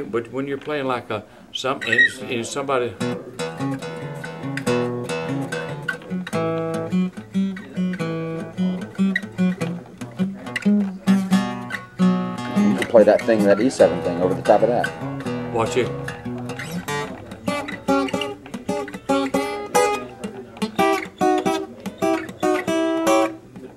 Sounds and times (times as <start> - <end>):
Speech: 0.0 - 3.7, 12.6 - 14.9, 15.5 - 16.0, 23.2 - 23.7
Acoustic guitar: 0.0 - 23.7.